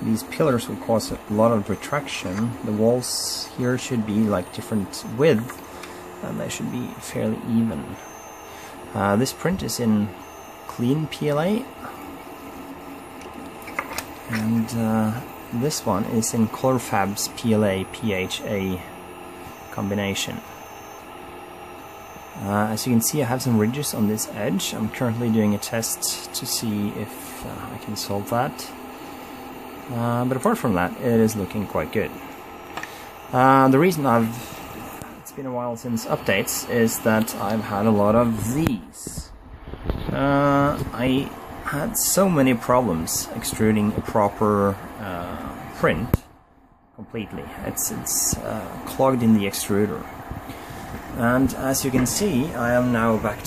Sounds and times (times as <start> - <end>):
Speech: 0.0 - 5.6, 6.2 - 8.1, 8.9 - 11.8, 14.3 - 19.0, 19.7 - 20.5, 22.4 - 28.8, 29.9 - 32.2, 33.3 - 34.4, 35.2 - 39.4, 40.1 - 46.3, 47.0 - 50.2, 51.1 - 53.4.